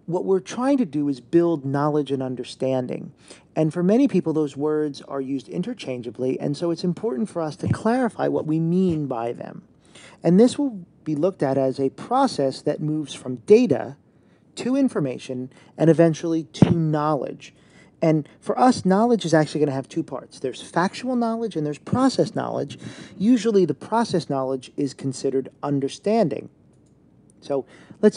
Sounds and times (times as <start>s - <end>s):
Speech: 0.0s - 14.0s, 14.6s - 26.5s, 27.4s - 28.1s.